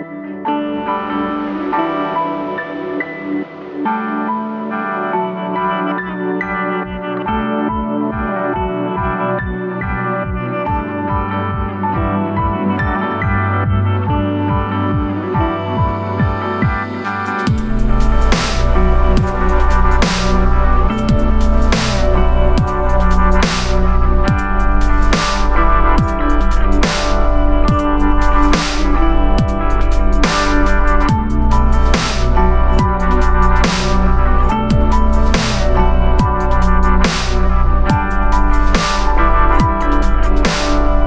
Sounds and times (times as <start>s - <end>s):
Synthesizer: 0.0s - 41.0s.